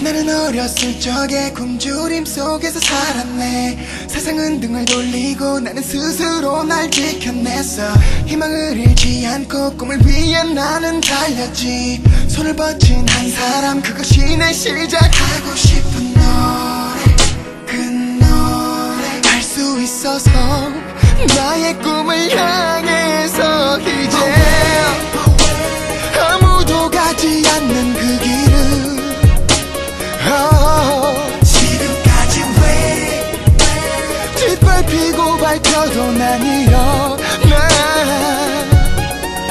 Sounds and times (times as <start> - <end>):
Music: 0.0 - 39.5.